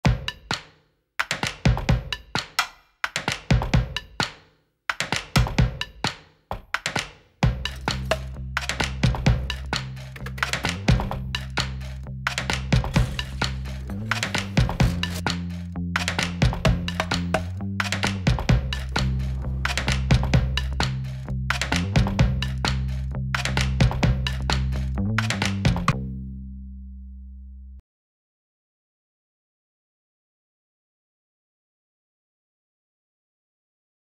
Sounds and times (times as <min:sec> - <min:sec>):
Snare drum: 0:00.1 - 0:15.4
Wood block: 0:00.1 - 0:26.0.